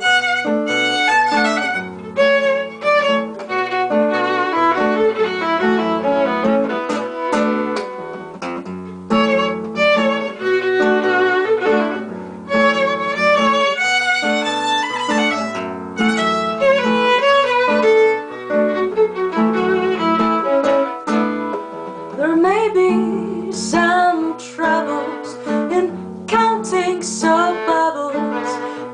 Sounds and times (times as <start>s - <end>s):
Violin, fiddle: 0.0s - 28.9s.